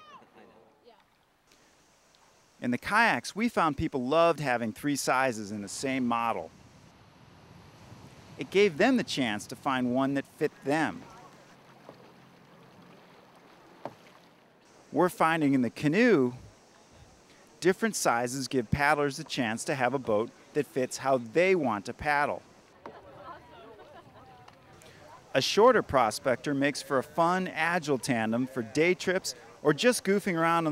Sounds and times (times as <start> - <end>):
Boat, Water vehicle: 0.0 - 30.7
Speech: 2.6 - 6.5, 8.4 - 11.3, 15.0 - 16.4, 17.6 - 22.4, 23.1 - 30.7.